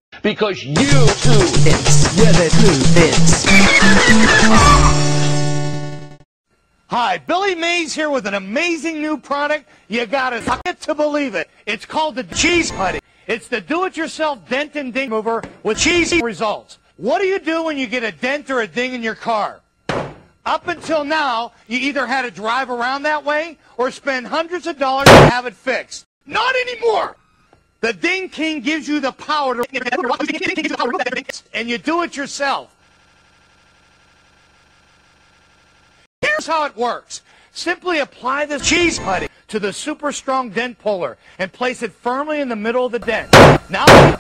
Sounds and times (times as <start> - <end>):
Speech: 0.2 - 3.3, 6.9 - 19.6, 20.5 - 27.2, 27.8 - 32.7, 36.2 - 43.9.